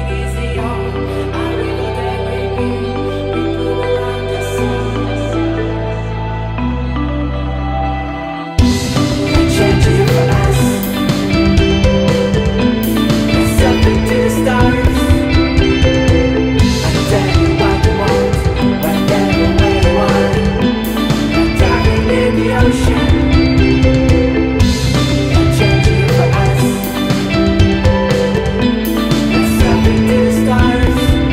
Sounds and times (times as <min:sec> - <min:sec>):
Background music: 0:00.0 - 0:31.3
Blues: 0:00.0 - 0:31.3.